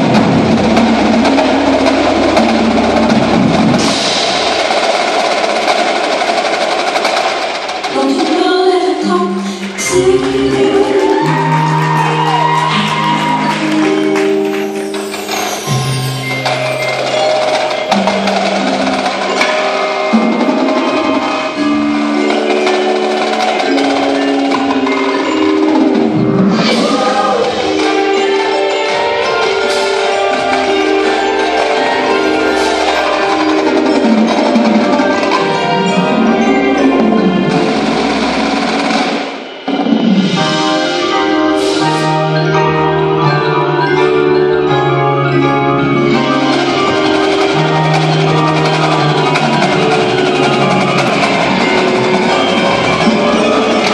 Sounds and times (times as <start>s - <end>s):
Wood block: 9.6s - 40.7s, 46.2s - 53.9s.